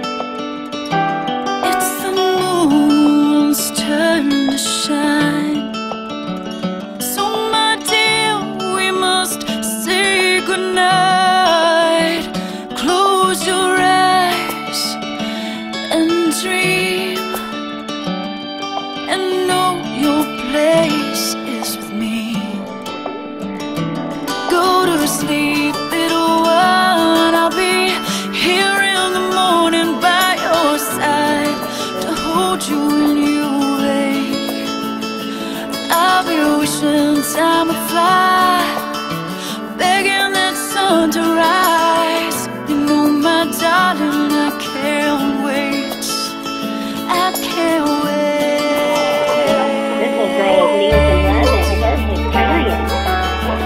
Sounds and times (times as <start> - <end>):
Lullaby: 24.3 - 52.0.